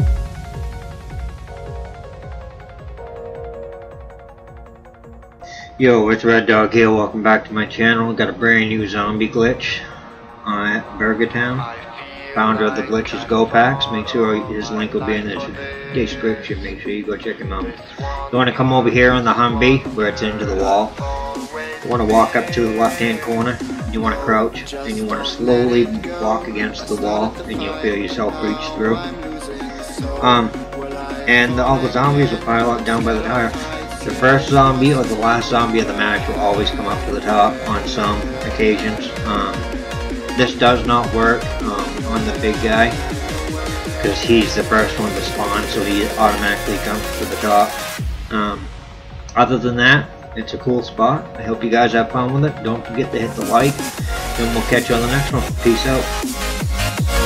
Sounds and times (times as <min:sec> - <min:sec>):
Speech: 0:05.5 - 0:21.1, 0:21.8 - 0:29.2, 0:30.0 - 0:30.6, 0:31.2 - 0:39.7, 0:40.4 - 0:43.1, 0:44.0 - 0:48.7, 0:49.3 - 0:53.8, 0:54.4 - 0:56.1.